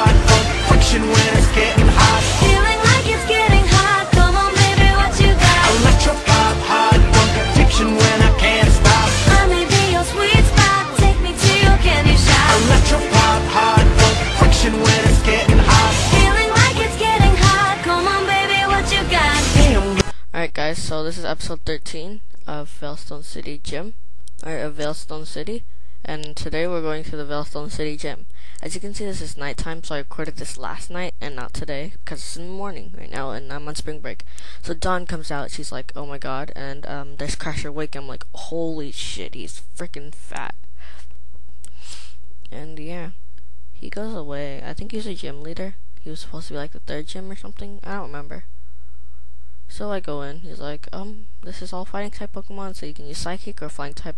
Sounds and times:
Speech: 20.0 - 40.6, 42.5 - 43.2, 43.8 - 48.5, 49.7 - 54.1.

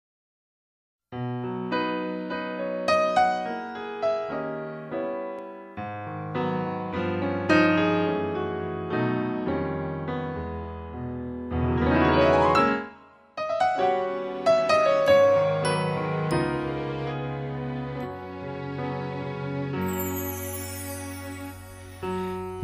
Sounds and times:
Piano: 1.1 - 22.6.

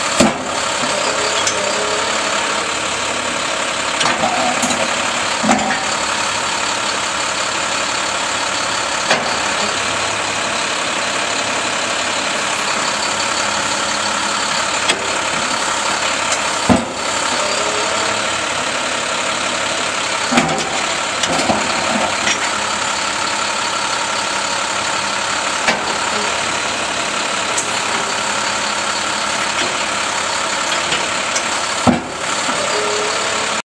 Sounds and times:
Truck: 0.0 - 33.6.

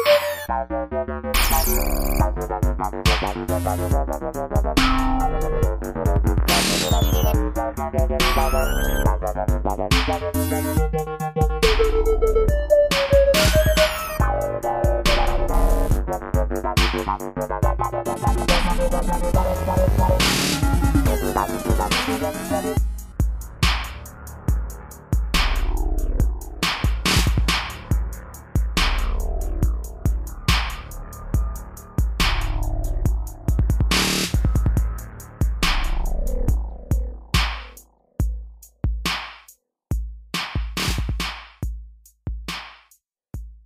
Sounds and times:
Dubstep: 0.0 - 37.8
Drum machine: 1.4 - 43.6.

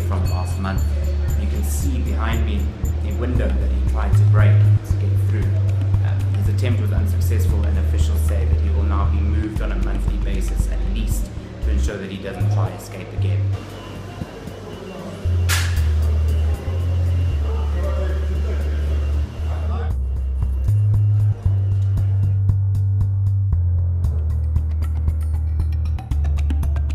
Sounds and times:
Speech: 0.0 - 15.4, 16.0 - 20.0
Inside, large room or hall: 0.0 - 26.9.

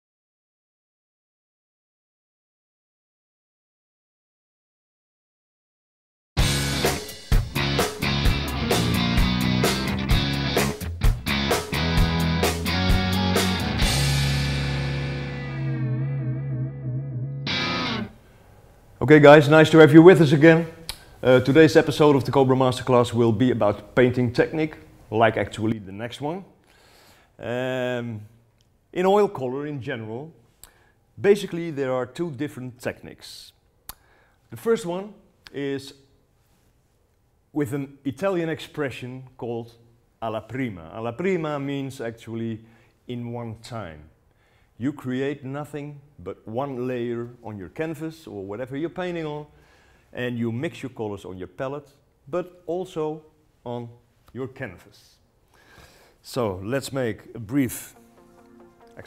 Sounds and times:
Speech: 19.0 - 26.6, 27.4 - 30.4, 31.2 - 33.6, 34.5 - 36.1, 37.5 - 44.2, 44.8 - 49.5, 50.1 - 55.2, 56.2 - 58.0.

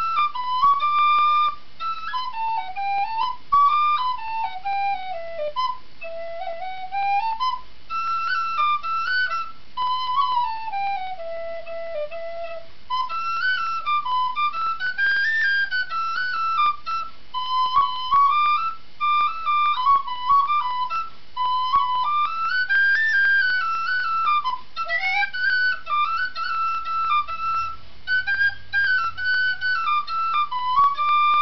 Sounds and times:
Flute: 0.0 - 31.4.

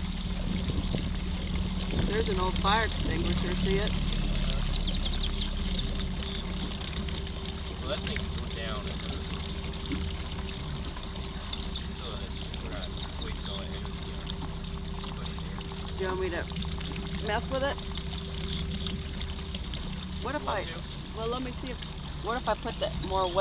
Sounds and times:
Boat, Water vehicle: 0.0 - 23.4.

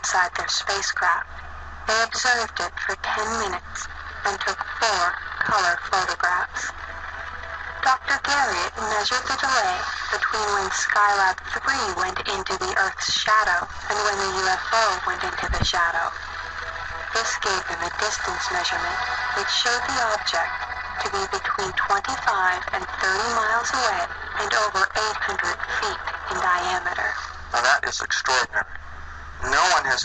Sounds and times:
Speech: 0.0 - 1.2, 1.9 - 6.7, 7.8 - 16.1, 17.2 - 28.8, 29.4 - 30.0
Music: 0.2 - 30.0.

